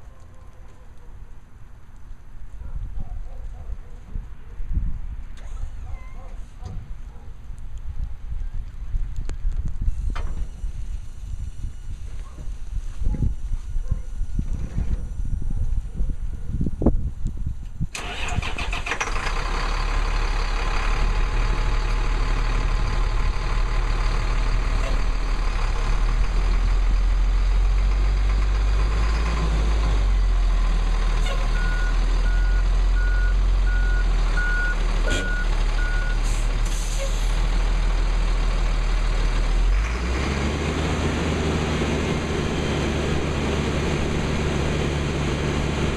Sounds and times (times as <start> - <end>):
Reversing beeps: 31.4 - 36.2.